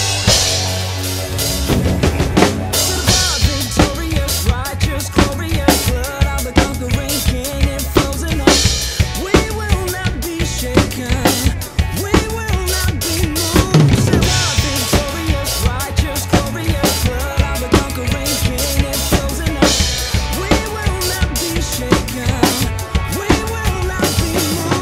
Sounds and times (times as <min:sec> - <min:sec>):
Pop music: 0:00.0 - 0:24.8.